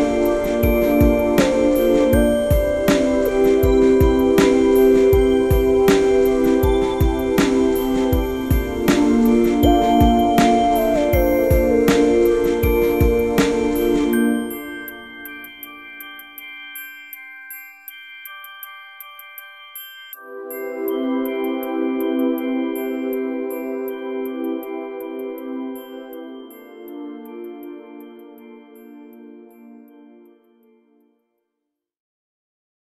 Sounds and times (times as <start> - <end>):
Marimba, xylophone: 0.0 - 28.2
Glockenspiel: 0.0 - 31.0.